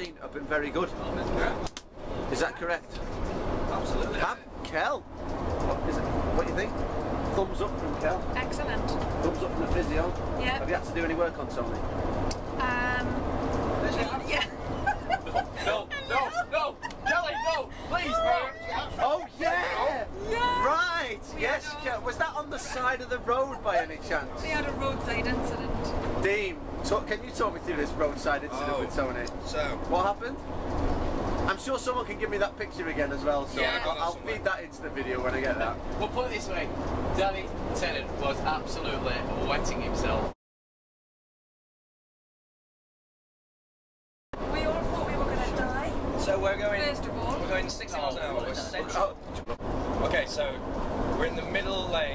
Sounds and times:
Outside, rural or natural: 0:00.0 - 0:40.4, 0:44.4 - 0:52.1
Vehicle: 0:00.0 - 0:40.4, 0:44.4 - 0:52.1.

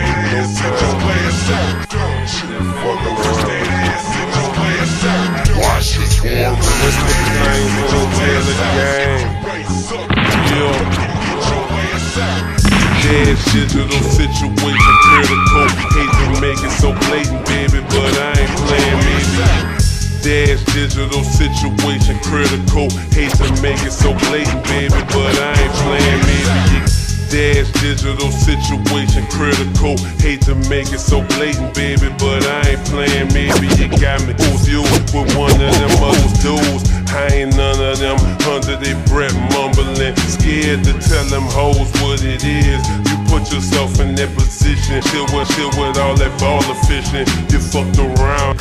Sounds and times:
Music: 0:00.0 - 0:48.6.

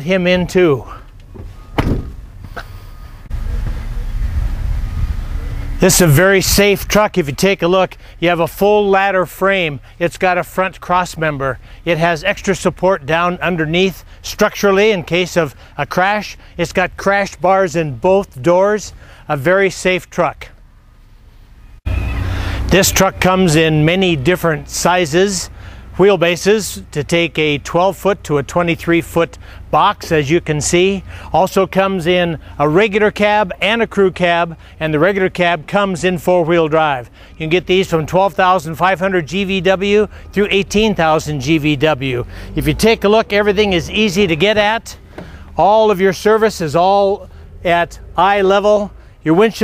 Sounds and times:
Speech: 0:00.0 - 0:01.0, 0:05.8 - 0:20.6, 0:22.7 - 0:45.0, 0:45.6 - 0:49.6
Vehicle: 0:00.0 - 0:49.6.

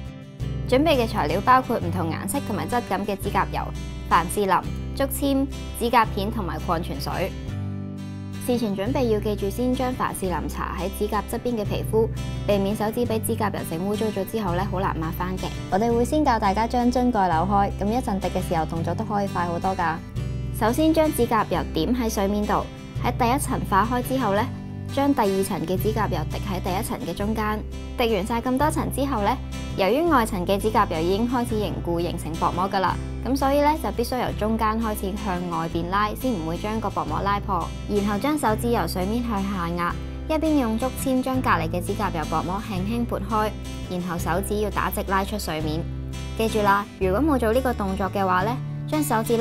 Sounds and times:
Music: 0:00.0 - 0:49.4
Speech: 0:00.7 - 0:07.3, 0:08.4 - 0:20.0, 0:20.6 - 0:49.4.

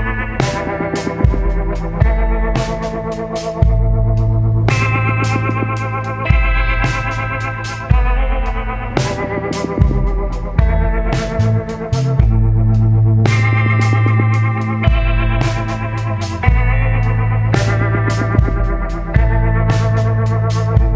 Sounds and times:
Music: 0:00.0 - 0:20.9.

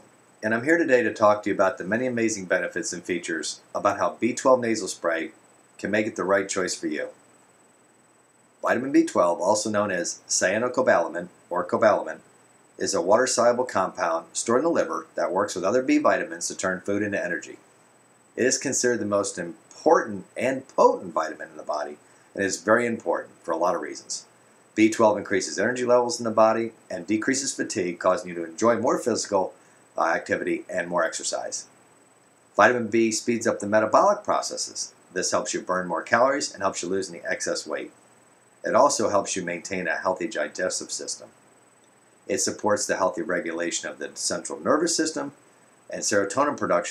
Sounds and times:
Speech: 0:00.0 - 0:07.2, 0:08.6 - 0:12.2, 0:12.8 - 0:17.6, 0:18.4 - 0:31.7, 0:32.6 - 0:38.0, 0:38.6 - 0:41.3, 0:42.3 - 0:46.9.

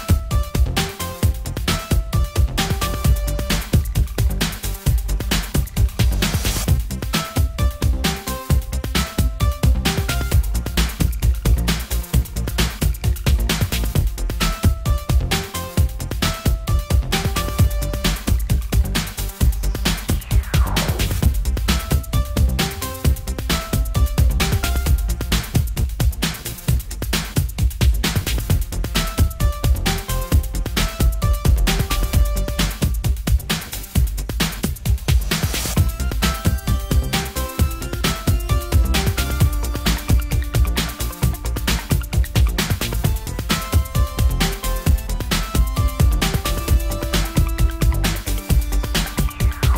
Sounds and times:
Music: 0:00.0 - 0:49.7.

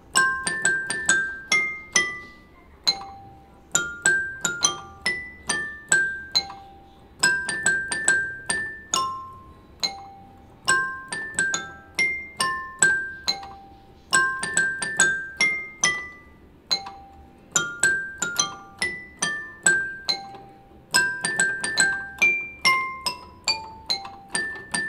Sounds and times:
Electric piano: 0:00.0 - 0:24.8.

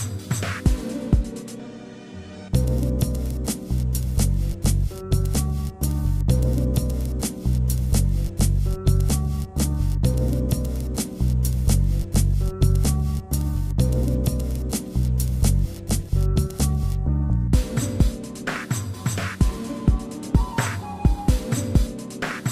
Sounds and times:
Music: 0:00.0 - 0:22.5.

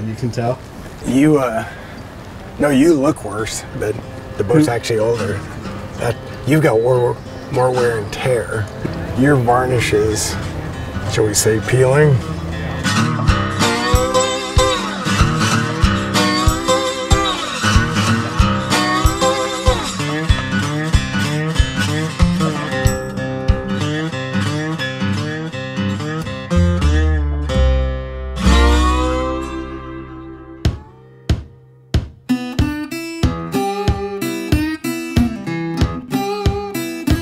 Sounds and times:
Music: 0:02.8 - 0:37.2.

